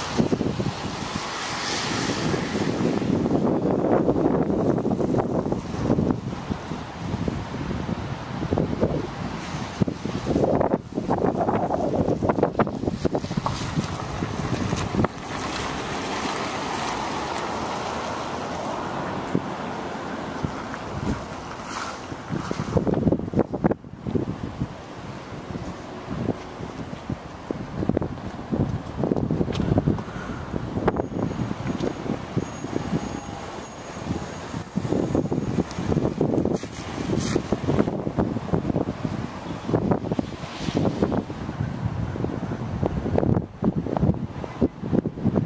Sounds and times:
Rain on surface: 12.1 - 21.9, 30.4 - 37.7.

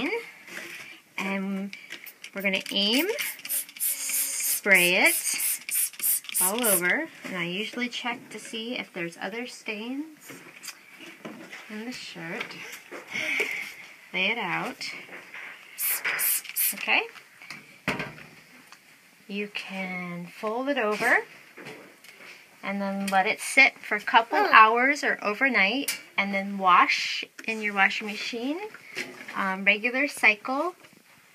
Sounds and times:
Speech: 1.2 - 1.7, 6.4 - 10.2, 14.2 - 15.0, 16.8 - 17.1, 19.3 - 21.3, 22.6 - 28.7, 29.3 - 30.8.

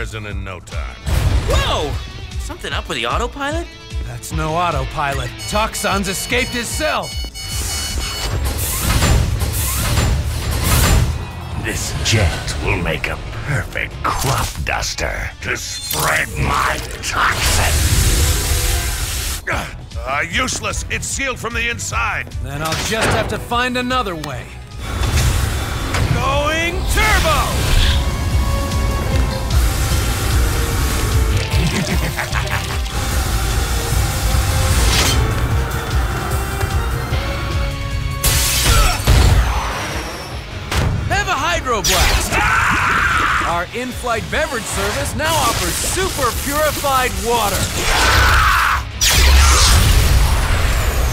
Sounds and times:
Music: 0.0 - 51.1
Speech: 11.6 - 17.8, 26.1 - 27.6, 41.1 - 42.5, 43.4 - 47.8.

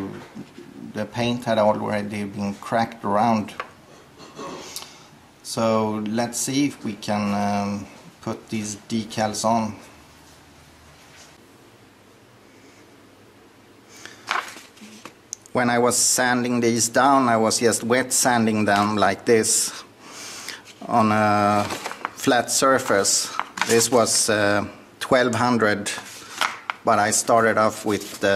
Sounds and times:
Speech: 0.0 - 3.6, 5.4 - 9.9, 15.5 - 19.8, 20.8 - 26.1, 26.9 - 28.3.

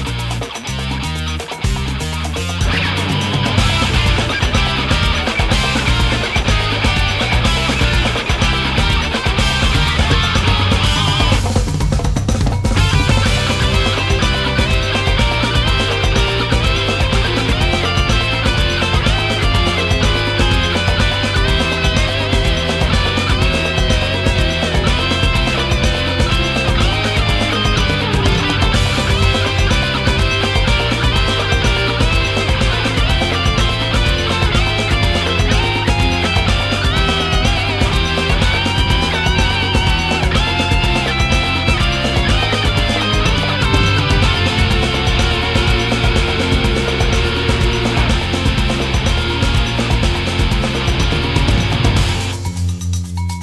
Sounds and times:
Background music: 0.0 - 53.4
Drum kit: 0.0 - 53.4.

